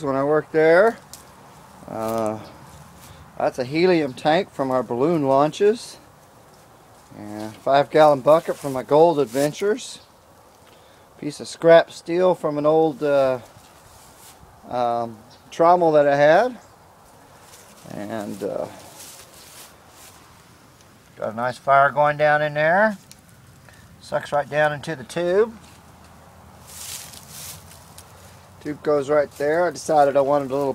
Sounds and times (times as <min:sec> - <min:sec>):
Speech: 0:00.0 - 0:01.0, 0:01.8 - 0:02.6, 0:03.4 - 0:06.0, 0:07.1 - 0:10.0, 0:11.2 - 0:13.5, 0:14.6 - 0:16.6, 0:17.8 - 0:19.0, 0:21.2 - 0:23.0, 0:24.0 - 0:25.7, 0:28.6 - 0:30.7.